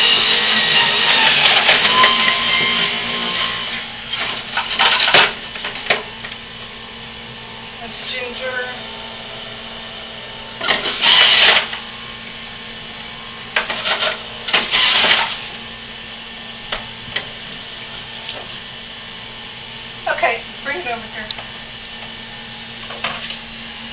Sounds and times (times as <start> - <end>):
Blender: 0.0 - 5.4, 10.6 - 11.8.